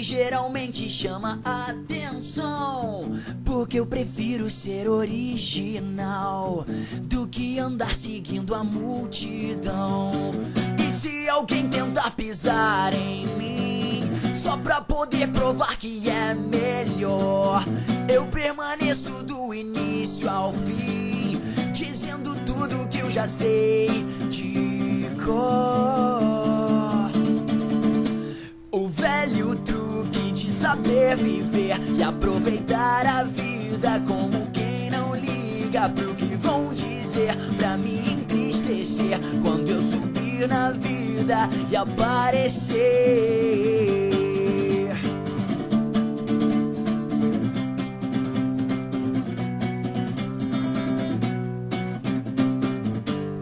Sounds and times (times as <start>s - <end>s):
Music: 0.0s - 53.4s.